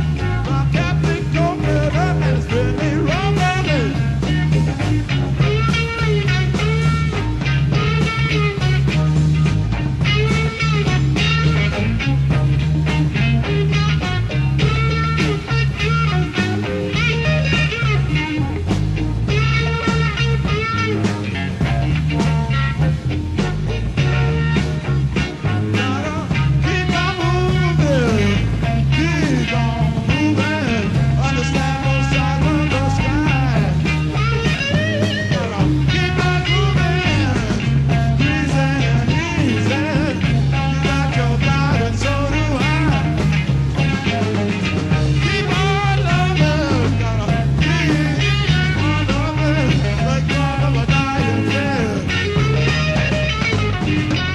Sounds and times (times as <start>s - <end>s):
Guitar: 0.0s - 54.3s
Psychedelic rock: 0.0s - 54.3s.